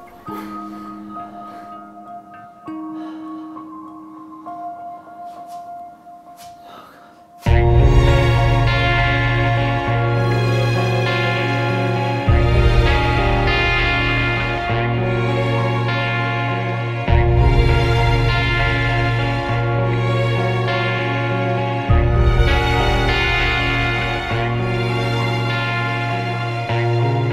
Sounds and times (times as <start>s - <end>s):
Ambient music: 0.0s - 27.3s.